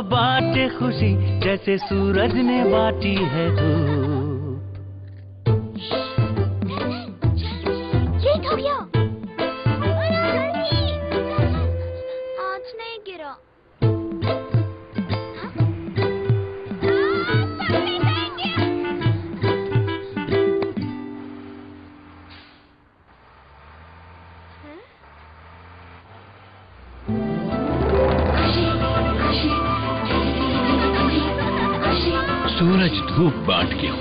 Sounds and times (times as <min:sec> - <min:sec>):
Music: 0:00.0 - 0:12.8, 0:13.8 - 0:22.2, 0:27.1 - 0:34.0.